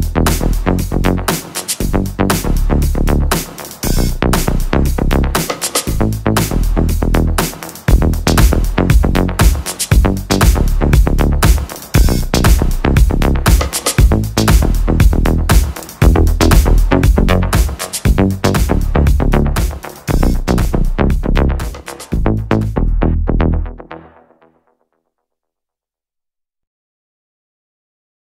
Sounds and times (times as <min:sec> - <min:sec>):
House music: 0:00.0 - 0:24.4.